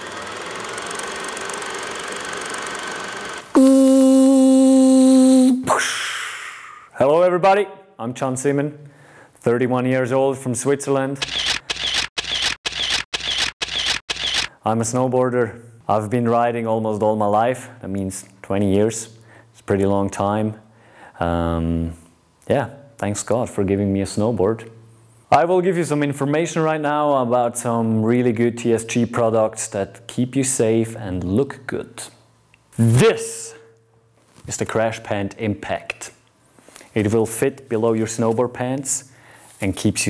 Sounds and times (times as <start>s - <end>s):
Speech: 7.0s - 8.8s, 9.4s - 11.2s, 14.6s - 20.6s, 21.2s - 32.2s, 32.8s - 33.7s, 34.4s - 36.2s, 36.9s - 40.0s.